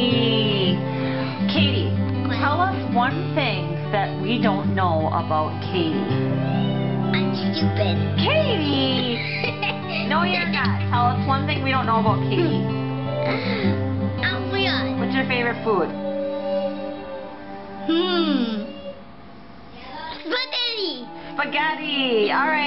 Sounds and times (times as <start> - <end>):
Inside, small room: 0.0 - 22.6
Music: 0.0 - 22.6
Child speech, kid speaking: 2.2 - 2.8, 7.1 - 8.2, 14.2 - 15.0, 19.8 - 21.2.